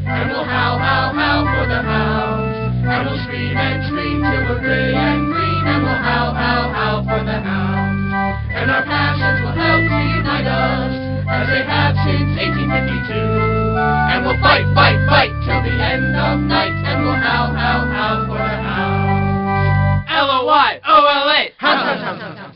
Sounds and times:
Organ: 0.0s - 20.2s.

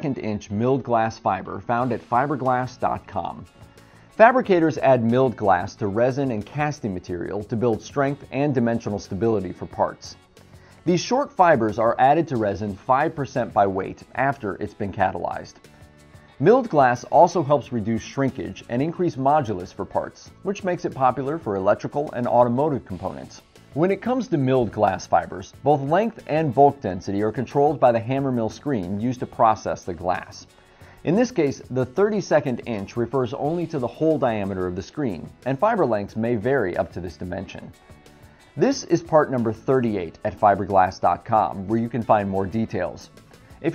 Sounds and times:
Speech: 0.0s - 3.5s, 4.2s - 10.2s, 10.9s - 15.6s, 16.4s - 37.8s, 38.6s - 43.7s.

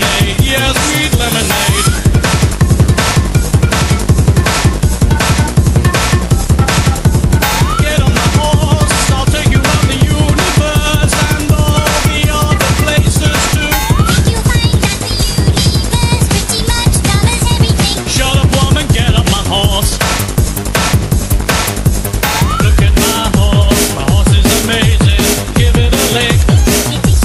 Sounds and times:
Bass drum: 0.0s - 27.2s
Drum kit: 0.0s - 27.2s.

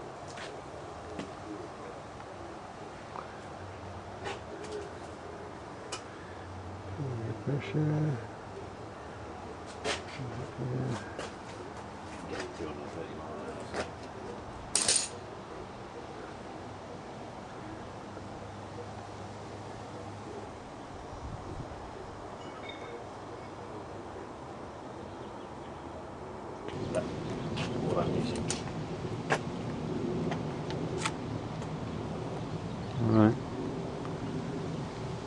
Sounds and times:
Speech: 7.0s - 8.3s, 10.1s - 11.3s, 12.2s - 14.4s, 27.8s - 28.6s, 32.9s - 33.4s.

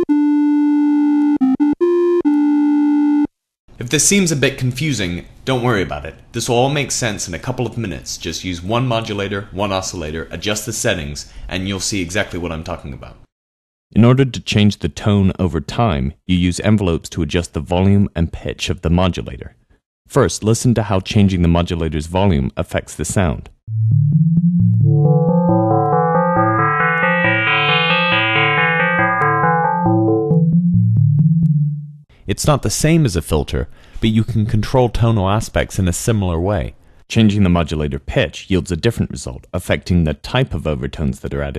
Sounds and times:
Speech: 3.8s - 13.3s, 13.9s - 23.6s, 32.3s - 41.5s
Synthesizer: 23.7s - 31.5s.

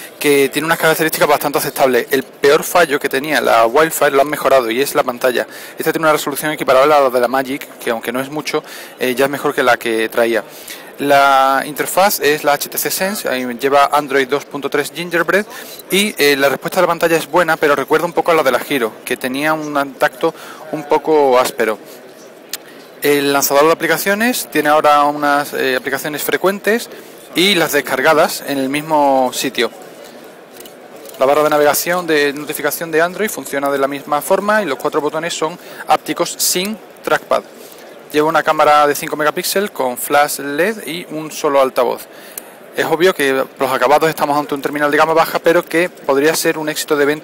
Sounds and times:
Speech: 0.2s - 22.1s, 23.0s - 30.2s, 31.2s - 37.5s, 38.1s - 42.1s, 42.7s - 47.2s.

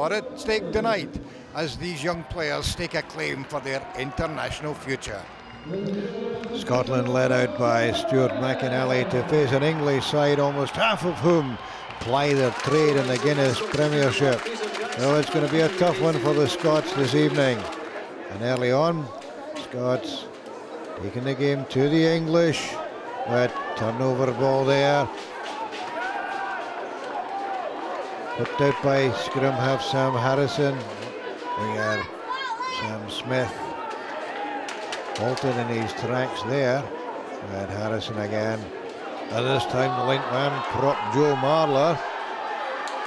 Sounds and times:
Speech: 0.0s - 17.7s, 39.3s - 42.0s.

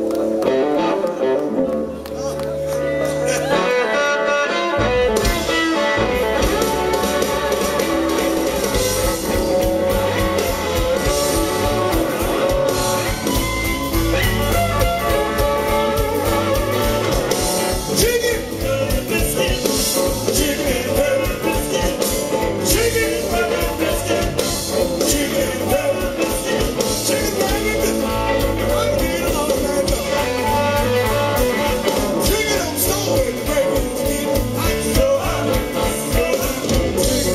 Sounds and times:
Blues: 0.0s - 37.3s.

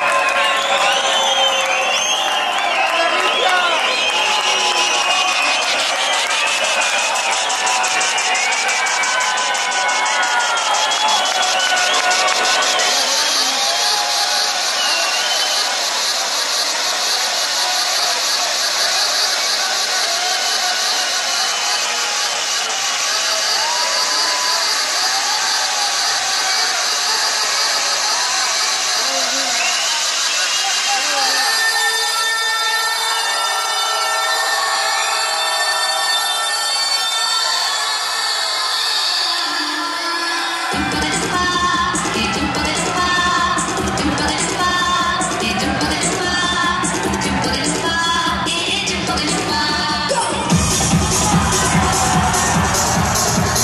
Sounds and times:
Music: 0.0s - 53.6s.

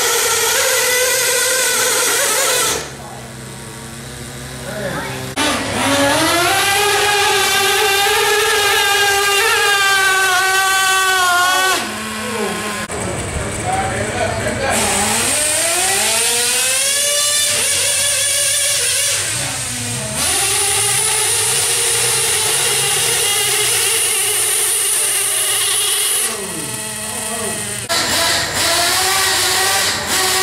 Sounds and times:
Truck: 0.0s - 30.4s.

